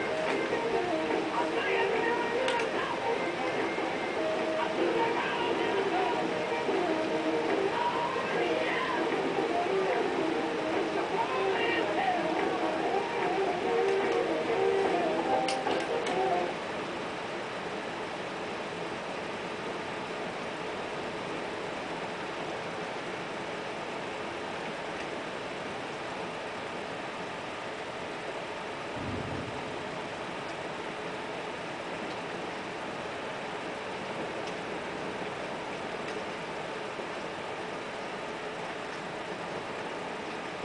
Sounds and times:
Rain on surface: 0.0 - 40.6.

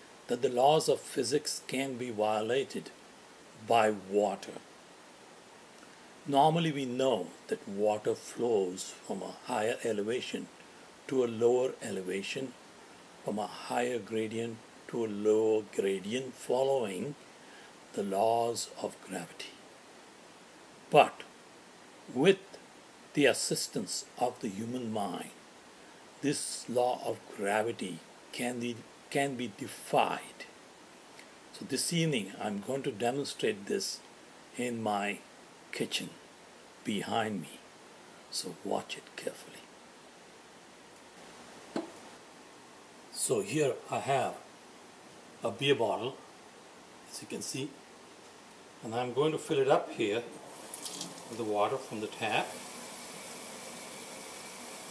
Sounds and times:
Speech: 0.3 - 3.0, 3.6 - 4.6, 6.3 - 10.5, 11.1 - 12.6, 13.3 - 17.2, 17.9 - 19.6, 20.9 - 21.3, 22.1 - 22.5, 23.2 - 25.4, 26.2 - 30.5, 31.6 - 34.0, 34.6 - 36.2, 36.8 - 37.6, 38.3 - 39.7, 43.1 - 44.5, 45.4 - 46.2, 47.1 - 47.8, 48.8 - 50.4, 51.3 - 52.6.

